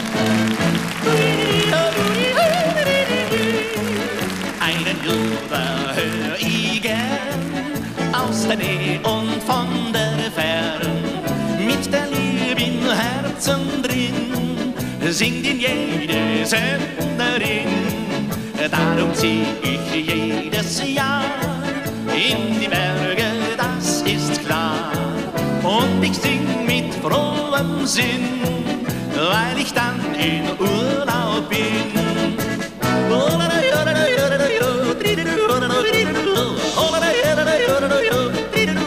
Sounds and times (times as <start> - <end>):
Soul music: 0.0 - 38.8.